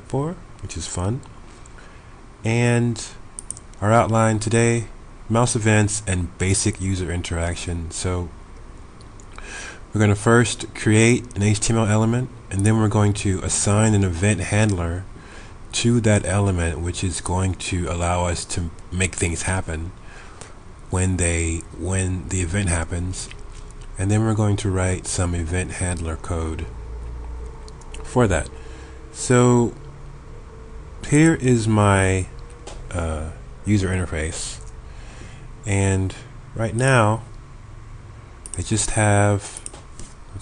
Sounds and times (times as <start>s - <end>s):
Speech: 0.0s - 1.3s, 2.4s - 3.2s, 3.8s - 8.4s, 9.9s - 15.1s, 15.7s - 20.0s, 20.9s - 26.7s, 28.0s - 28.5s, 29.2s - 29.8s, 31.0s - 32.3s, 32.9s - 34.6s, 35.6s - 37.3s, 38.6s - 39.6s.